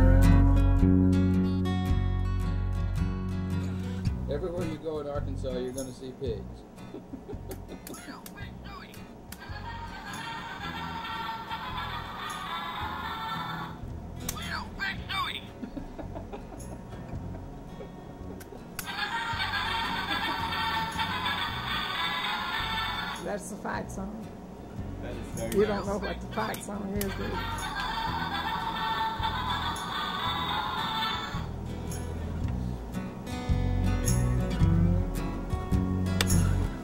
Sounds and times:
Music: 0:00.0 - 0:36.8.

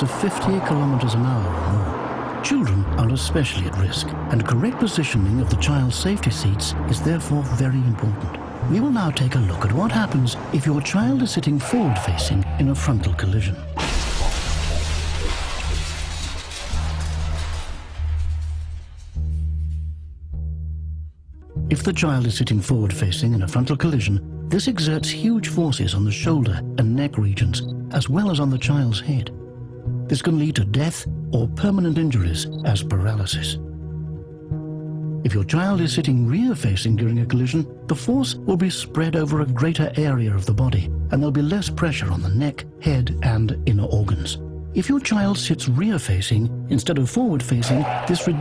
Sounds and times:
Speech: 0:00.0 - 0:13.7, 0:21.7 - 0:29.4, 0:30.1 - 0:33.6, 0:35.3 - 0:48.4
Music: 0:00.0 - 0:48.4.

